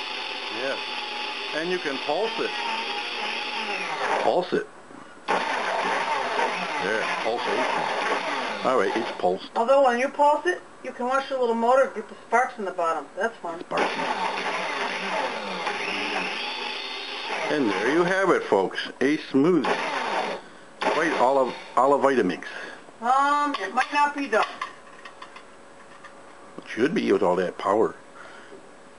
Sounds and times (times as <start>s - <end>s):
Blender: 0.0s - 4.6s, 5.3s - 9.3s, 13.8s - 18.2s, 19.6s - 21.9s.